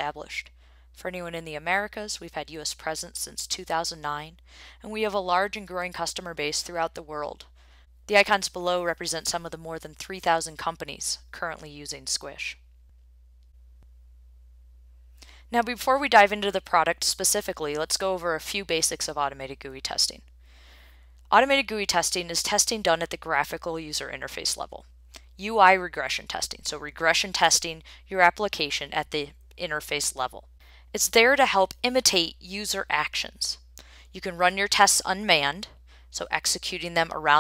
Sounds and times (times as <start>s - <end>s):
Speech: 0.0s - 7.4s, 8.1s - 12.6s, 15.5s - 20.2s, 21.3s - 24.8s, 25.4s - 30.4s, 31.0s - 33.6s, 34.2s - 37.4s.